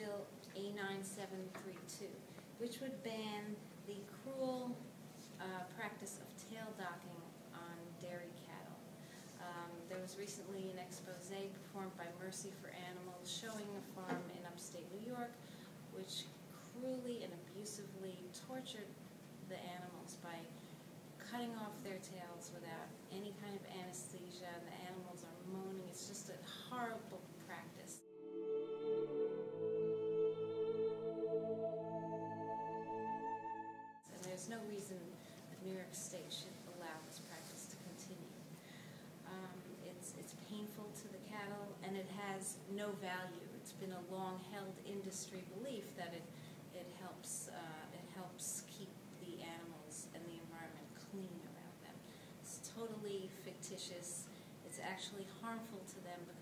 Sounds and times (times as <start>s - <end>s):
Speech: 0.0s - 20.6s, 21.2s - 28.0s, 34.1s - 38.5s, 39.2s - 56.4s.